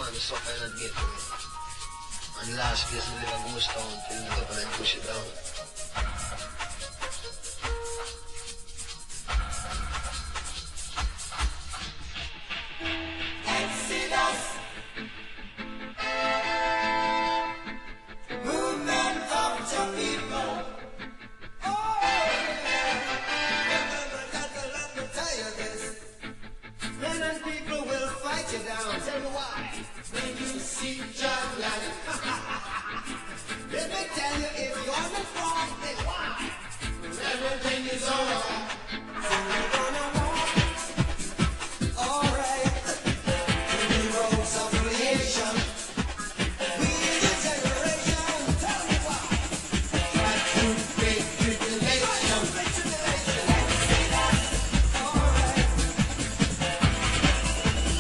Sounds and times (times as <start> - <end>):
Music: 0.0 - 58.0.